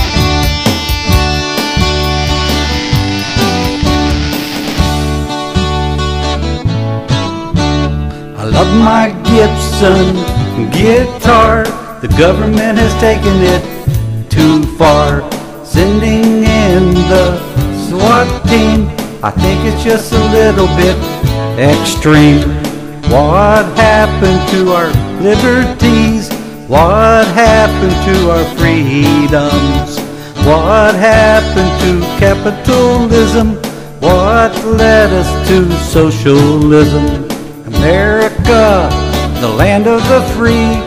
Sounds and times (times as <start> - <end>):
Strum: 0.0 - 15.0
Acoustic guitar: 0.0 - 40.8.